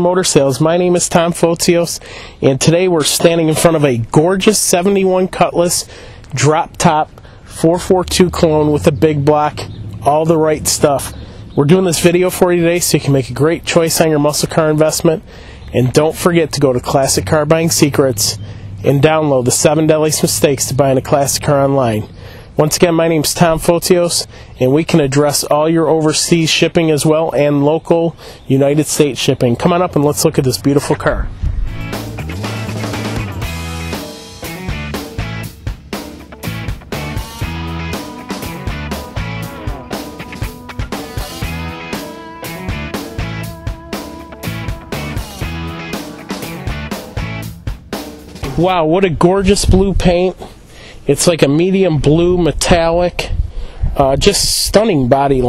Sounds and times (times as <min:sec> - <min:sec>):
Speech: 0:00.0 - 0:31.3, 0:48.4 - 0:50.5, 0:51.1 - 0:53.4, 0:54.0 - 0:55.4.